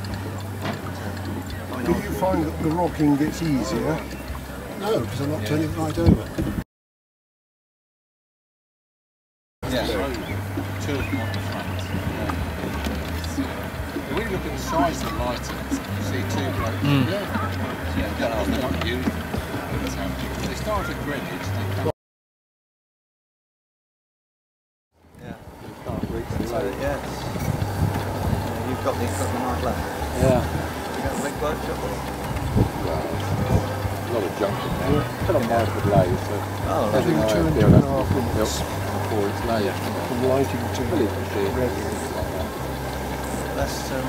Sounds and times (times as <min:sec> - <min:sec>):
Speech: 0:00.0 - 0:06.4, 0:09.6 - 0:21.9, 0:25.2 - 0:27.3, 0:28.4 - 0:42.6, 0:43.2 - 0:44.0
Boat, Water vehicle: 0:00.0 - 0:06.6, 0:09.6 - 0:21.9, 0:25.0 - 0:44.0
Engine: 0:00.0 - 0:06.6, 0:09.6 - 0:21.9, 0:25.2 - 0:44.0
Music: 0:00.0 - 0:06.6, 0:09.6 - 0:21.9, 0:25.1 - 0:44.0.